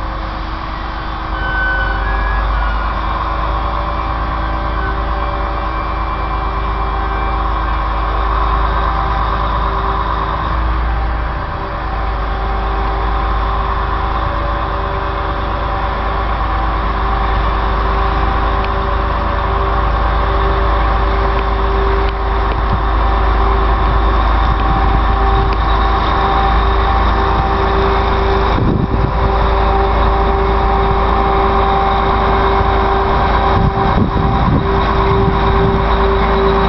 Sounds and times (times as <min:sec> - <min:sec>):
Vehicle: 0:00.0 - 0:36.6.